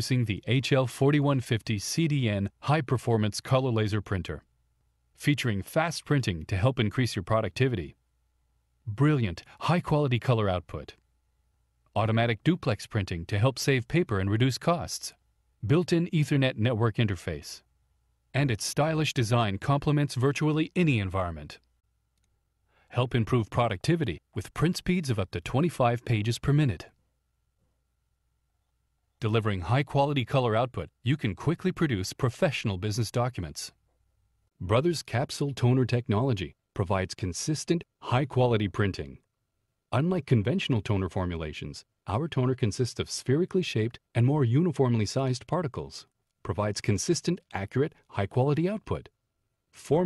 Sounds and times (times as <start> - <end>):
Speech: 0.0 - 4.5, 5.2 - 8.0, 8.9 - 11.0, 11.9 - 17.6, 18.4 - 21.6, 22.9 - 27.0, 29.2 - 33.8, 34.6 - 39.3, 39.9 - 49.2, 49.8 - 50.0.